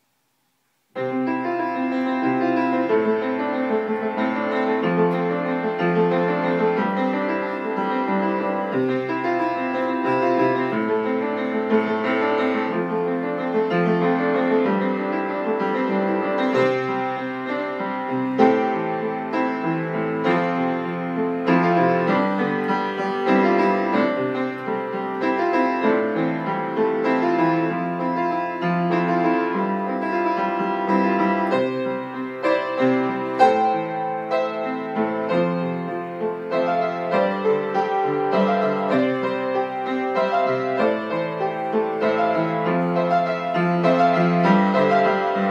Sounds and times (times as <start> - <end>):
Music: 0.9 - 45.5.